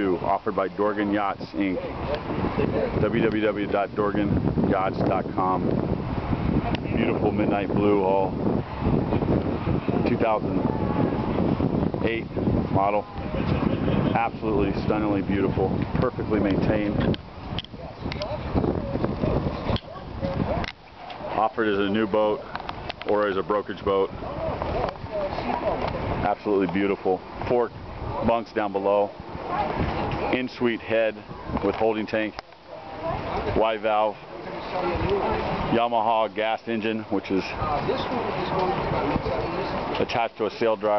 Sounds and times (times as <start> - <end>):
Speech: 0.0 - 5.6, 14.2 - 17.0, 33.1 - 40.9
Sailboat, sailing ship: 0.0 - 40.9.